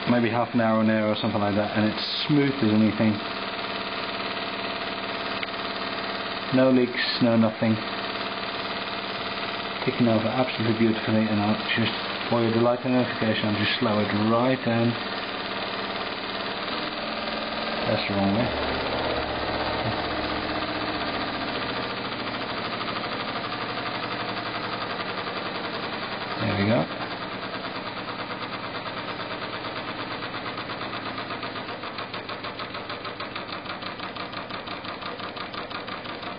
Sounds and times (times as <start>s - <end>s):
Engine: 0.0s - 36.3s
Speech: 0.1s - 3.3s, 6.5s - 7.9s, 9.8s - 15.0s, 17.8s - 18.6s, 26.4s - 26.9s.